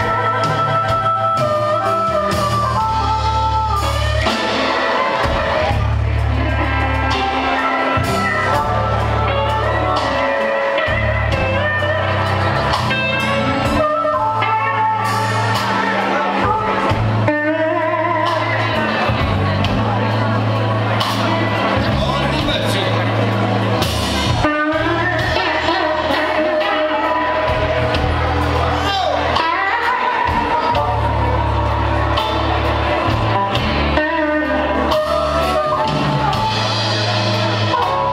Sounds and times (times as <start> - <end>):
Music: 0.0 - 38.1.